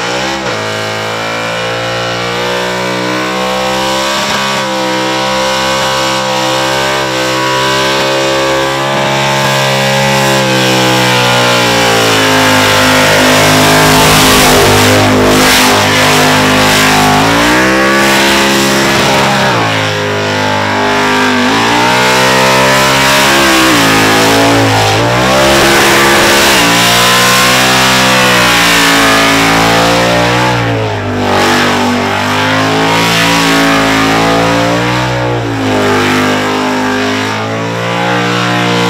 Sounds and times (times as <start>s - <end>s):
Accelerating, revving, vroom: 0.0s - 38.8s
Race car, auto racing: 0.0s - 38.8s.